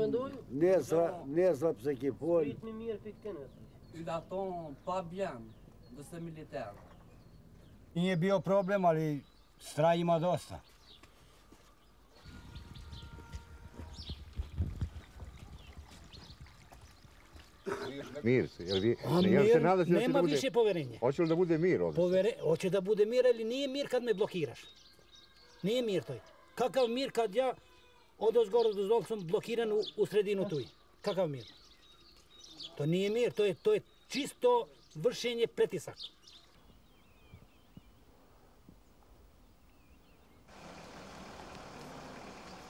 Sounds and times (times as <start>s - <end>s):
Speech: 8.0s - 10.7s, 17.8s - 24.7s, 28.2s - 31.6s, 32.5s - 36.0s.